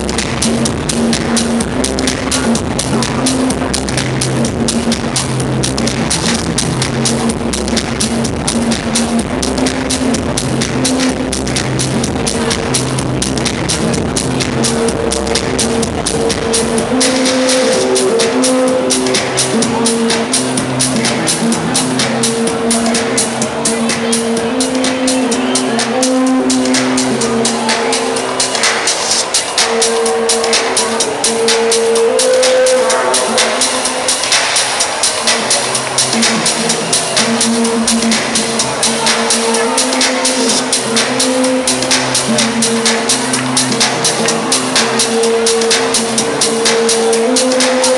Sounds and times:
Techno: 0.0s - 47.9s.

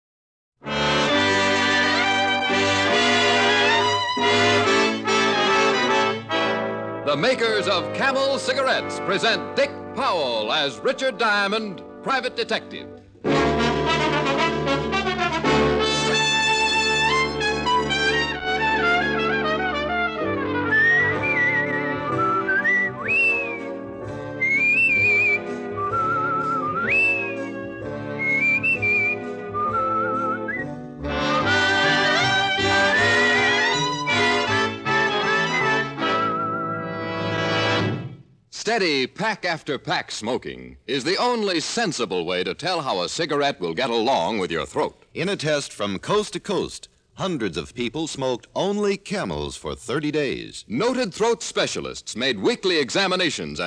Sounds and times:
Music: 0.6s - 38.4s.

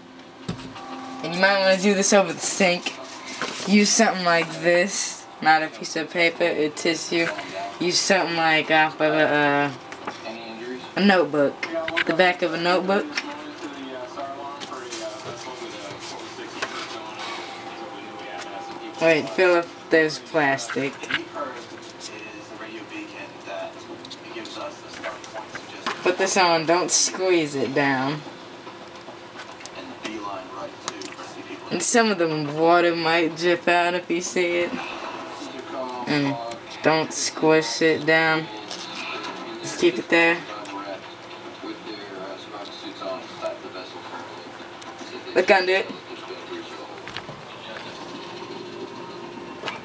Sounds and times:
Speech: 1.2s - 28.3s.

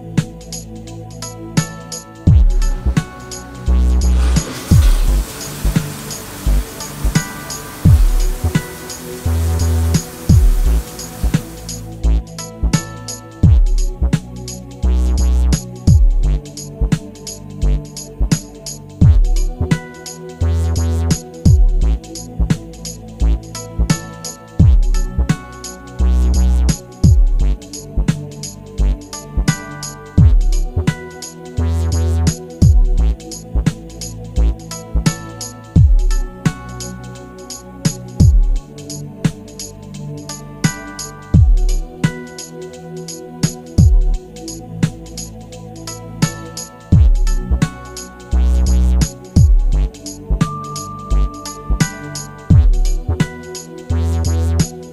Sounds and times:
Music: 0.0s - 54.9s.

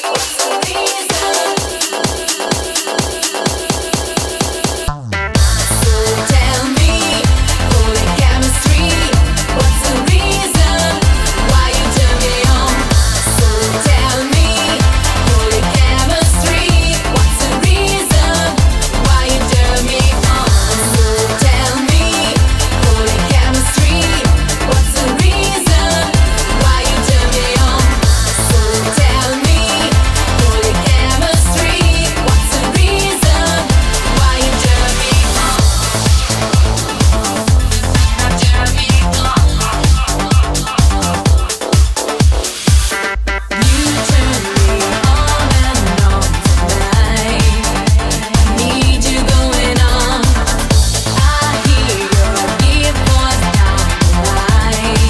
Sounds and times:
Music: 0.0s - 55.1s.

